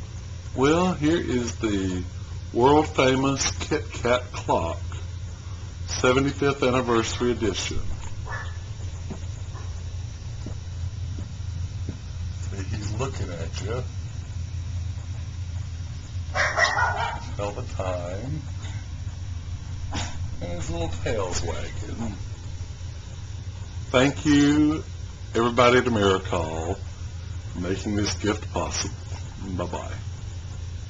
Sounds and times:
Speech: 0.5 - 5.0, 5.9 - 8.0, 12.4 - 13.9, 17.3 - 18.5, 20.4 - 22.2, 23.9 - 26.8, 27.5 - 30.1.

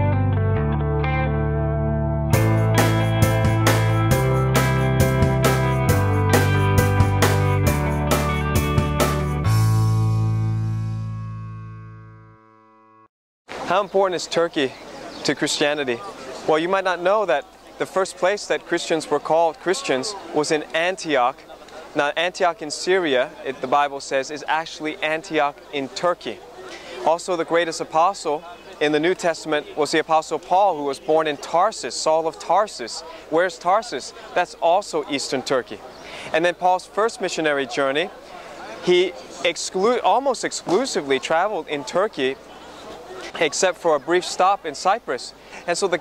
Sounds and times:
Speech: 13.6 - 46.0.

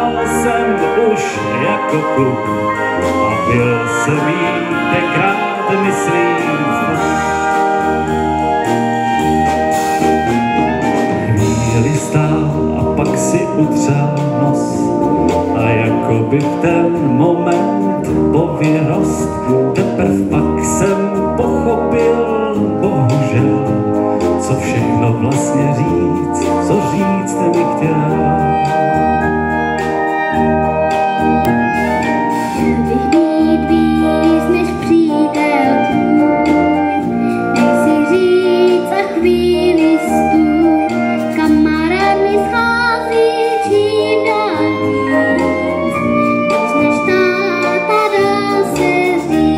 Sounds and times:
Orchestra: 0.0 - 49.5
Wind instrument, woodwind instrument: 0.0 - 49.5.

